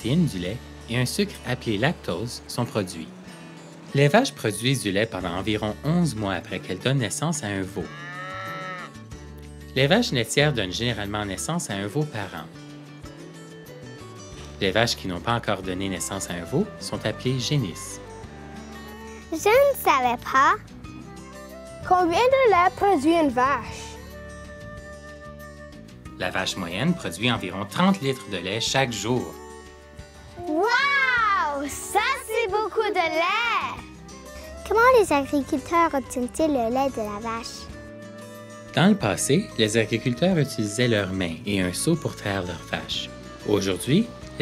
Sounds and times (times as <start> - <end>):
Music: 0.0 - 44.4.